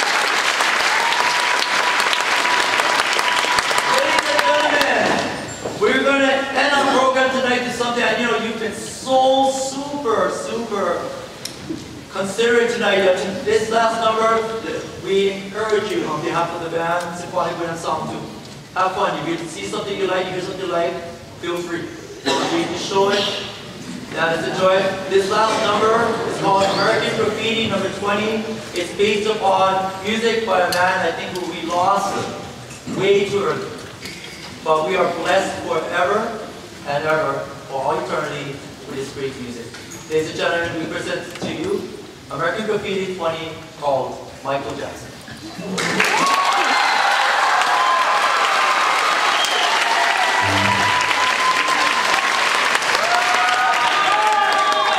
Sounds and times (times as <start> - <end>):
Speech: 3.9 - 11.3, 12.1 - 33.8, 34.6 - 46.0.